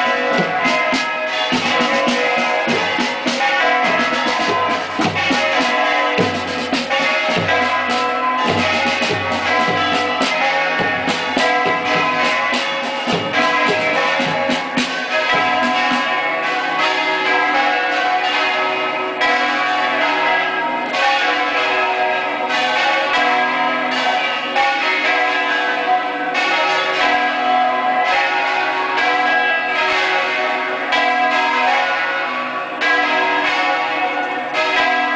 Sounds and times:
Church bell: 0.0 - 35.1.

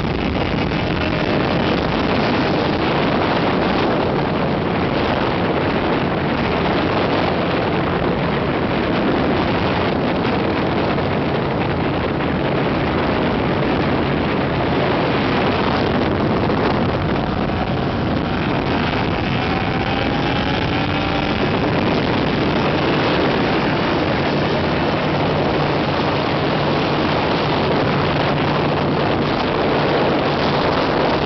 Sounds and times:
Motorboat, speedboat: 0.0 - 31.2.

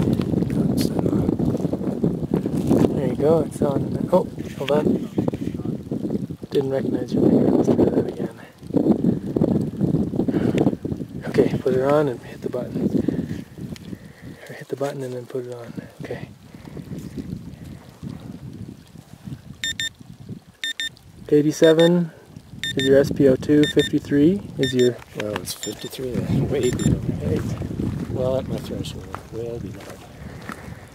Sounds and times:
Speech: 2.9 - 5.8, 6.5 - 8.5, 14.5 - 16.3, 22.8 - 27.5, 28.2 - 30.0.

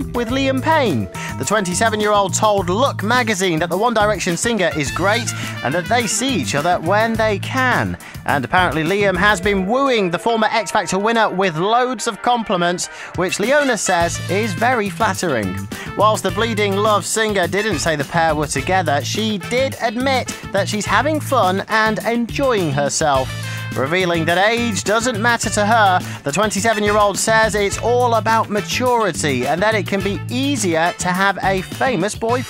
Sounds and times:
Music: 0.0 - 32.4
Speech: 0.0 - 32.4.

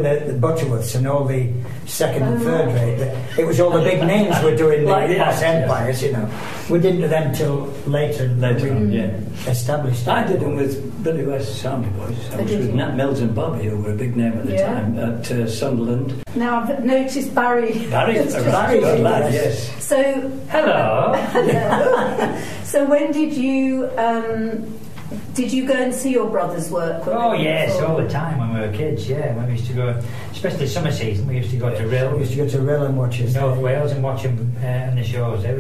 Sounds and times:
Female speech, woman speaking: 2.2 - 5.5, 8.6 - 9.2, 12.3 - 13.0, 14.4 - 15.0, 16.3 - 28.2
Chuckle, chortle: 21.2 - 22.6.

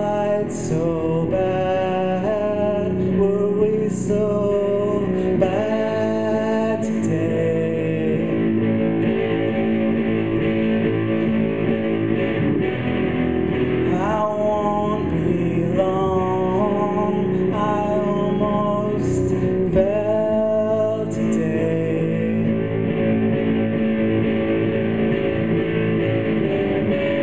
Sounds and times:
Singing: 0.0 - 8.6, 13.9 - 23.0
Electric guitar: 0.0 - 27.2.

